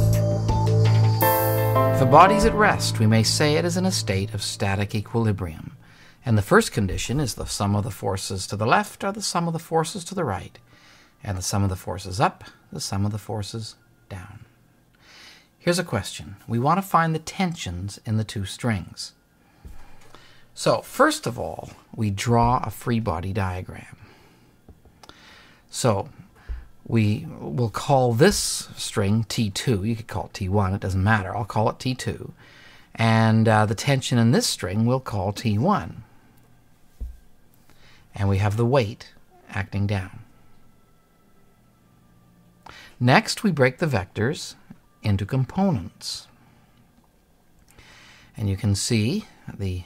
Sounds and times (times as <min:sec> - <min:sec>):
Speech: 0:02.0 - 0:10.6, 0:11.2 - 0:14.5, 0:15.6 - 0:19.2, 0:20.6 - 0:24.0, 0:25.7 - 0:26.2, 0:26.9 - 0:32.4, 0:33.0 - 0:36.1, 0:38.2 - 0:40.3, 0:43.0 - 0:46.3, 0:48.4 - 0:49.8.